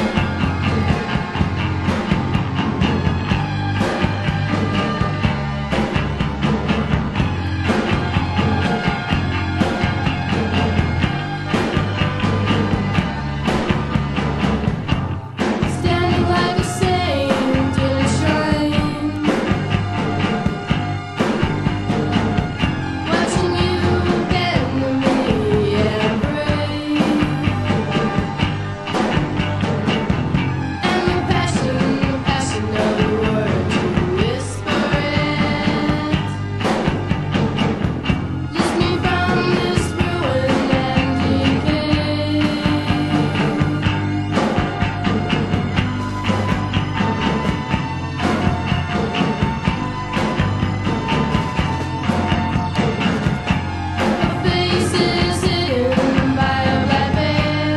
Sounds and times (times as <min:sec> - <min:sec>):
Music: 0:00.0 - 0:57.7.